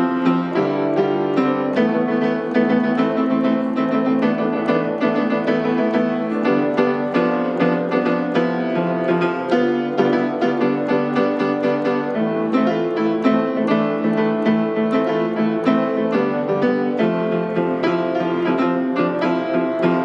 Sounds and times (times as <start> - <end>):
Piano: 0.0 - 20.0.